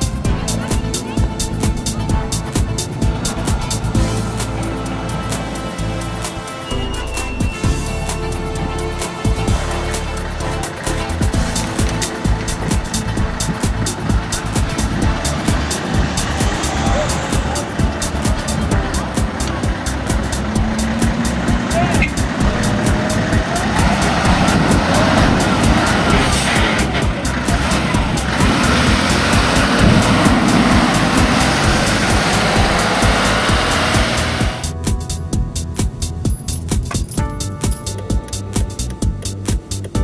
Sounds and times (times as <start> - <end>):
Music: 0.0 - 40.0
Truck: 0.0 - 40.0
Speech: 21.7 - 30.1.